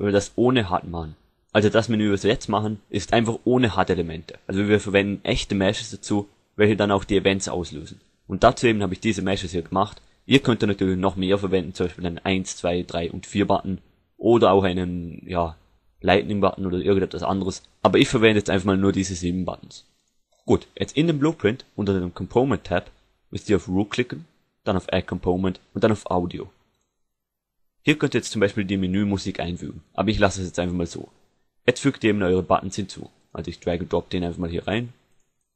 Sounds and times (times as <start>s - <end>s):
Speech: 0.0s - 19.9s, 20.5s - 26.5s, 27.9s - 35.0s.